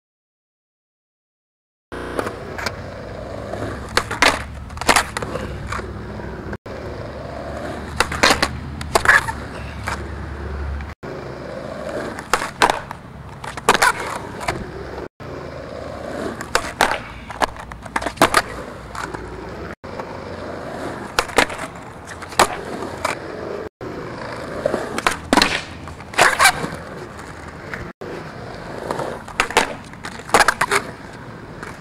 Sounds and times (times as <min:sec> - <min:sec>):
Skateboard: 0:02.0 - 0:31.8.